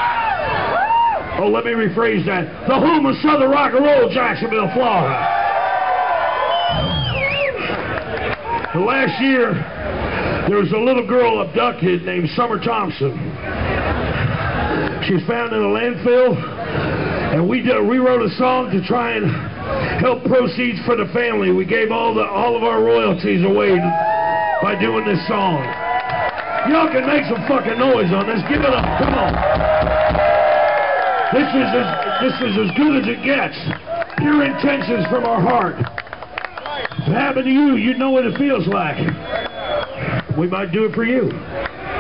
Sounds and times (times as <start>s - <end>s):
Speech: 1.4s - 5.2s, 8.7s - 9.6s, 10.5s - 13.2s, 15.0s - 16.4s, 17.3s - 19.4s, 20.0s - 24.0s, 24.6s - 25.7s, 26.7s - 29.2s, 31.4s - 35.9s, 37.0s - 39.1s, 40.3s - 41.4s.